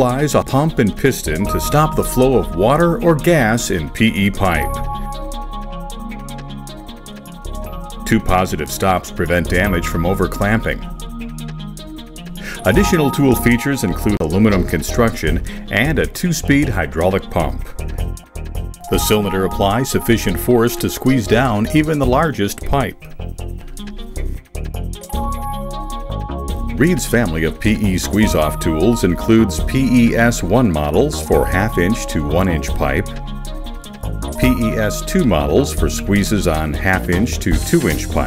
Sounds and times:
Speech: 0.0 - 4.8, 8.1 - 10.8, 12.6 - 17.8, 18.9 - 23.0, 26.8 - 33.2, 34.4 - 38.2
Music: 0.0 - 38.2.

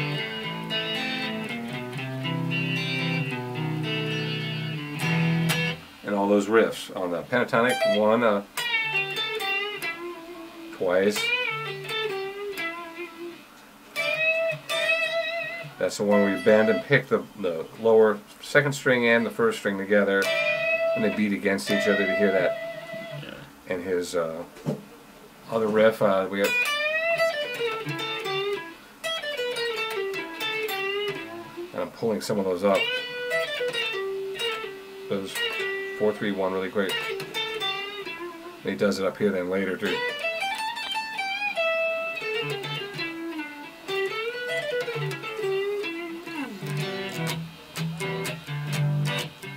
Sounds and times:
Tapping (guitar technique): 0.0 - 5.9, 7.7 - 17.0, 20.2 - 23.5, 25.6 - 31.7, 32.6 - 38.8, 39.6 - 49.5
Electric guitar: 0.0 - 6.0, 7.6 - 17.1, 20.0 - 23.6, 25.6 - 49.5
Speech: 6.0 - 8.5, 10.8 - 11.3, 15.8 - 20.3, 21.0 - 22.6, 23.2 - 24.5, 25.5 - 26.6, 31.7 - 32.9, 35.1 - 35.4, 36.0 - 37.0, 38.6 - 40.1.

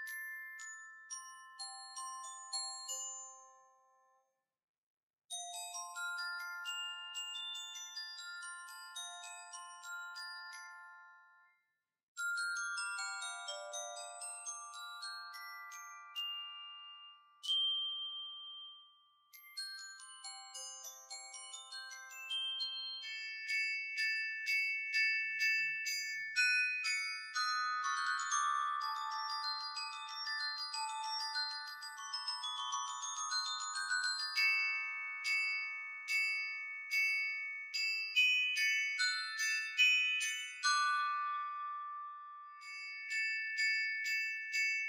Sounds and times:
Glockenspiel: 0.0 - 4.6, 5.3 - 44.8
Marimba, xylophone: 5.3 - 11.3, 12.2 - 44.8.

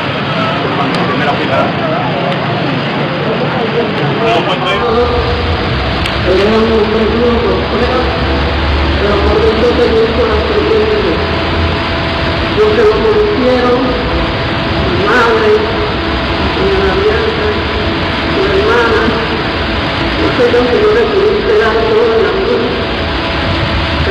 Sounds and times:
Speech: 0.3 - 5.4, 6.2 - 11.3, 12.6 - 14.0, 14.8 - 15.8, 16.4 - 17.7, 18.4 - 19.3, 20.2 - 22.8.

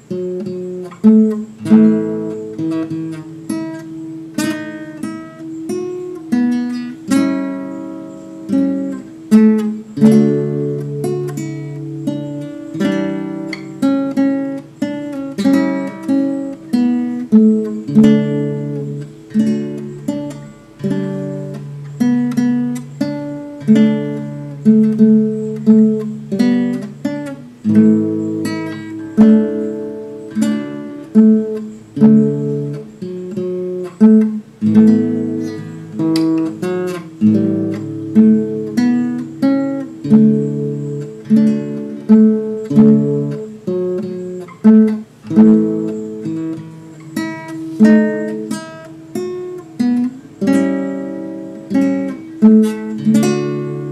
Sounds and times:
Guitar: 0.0 - 53.9.

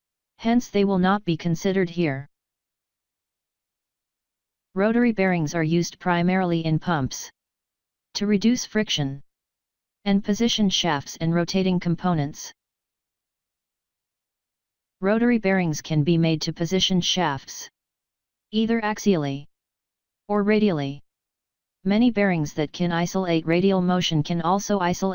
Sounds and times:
Speech: 0.4 - 2.3, 4.8 - 7.3, 8.2 - 9.2, 10.1 - 12.6, 15.0 - 17.7, 18.6 - 19.5, 20.3 - 21.0, 21.9 - 25.1.

